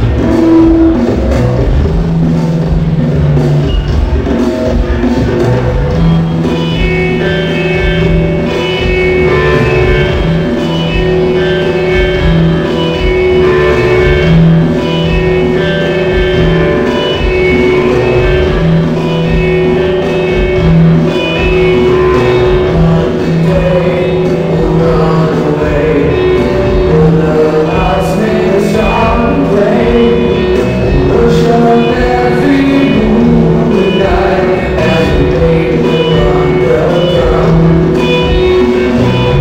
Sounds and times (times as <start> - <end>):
Drum: 0.0 - 39.4
Drum kit: 0.0 - 39.4.